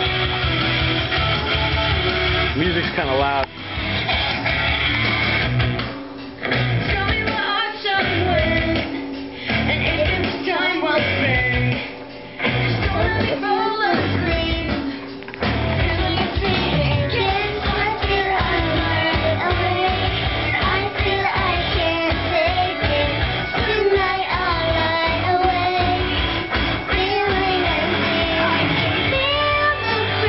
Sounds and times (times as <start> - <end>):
Music: 0.0 - 30.2
Female singing: 6.8 - 8.9, 9.7 - 11.8, 12.8 - 14.8, 15.7 - 26.1, 26.9 - 30.2
Child singing: 15.8 - 26.2, 26.9 - 30.2.